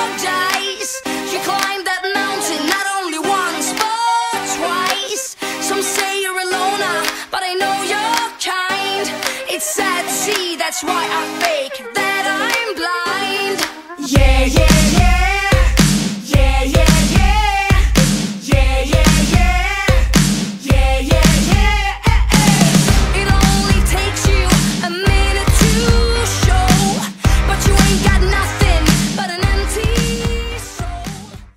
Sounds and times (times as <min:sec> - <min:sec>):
Music: 0:00.0 - 0:31.5.